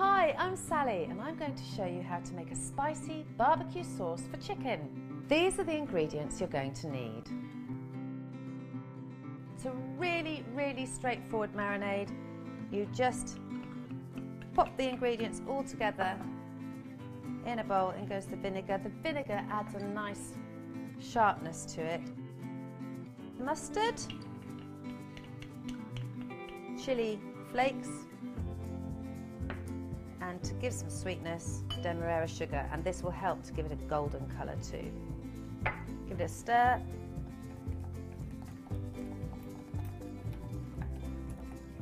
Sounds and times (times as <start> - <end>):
Speech: 0.0 - 7.2, 9.6 - 12.1, 14.6 - 16.2, 17.5 - 20.4, 21.0 - 22.0, 23.4 - 24.1, 30.2 - 35.0, 36.1 - 36.9
Music: 0.0 - 41.8.